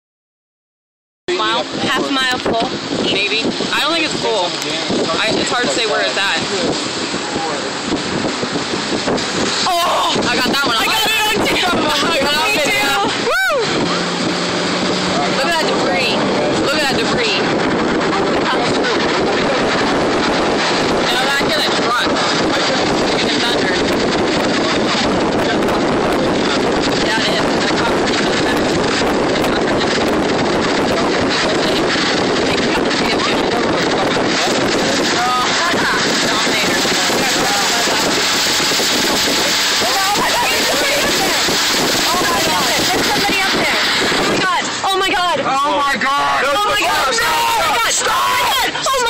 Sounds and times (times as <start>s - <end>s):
Eruption: 1.5s - 49.0s.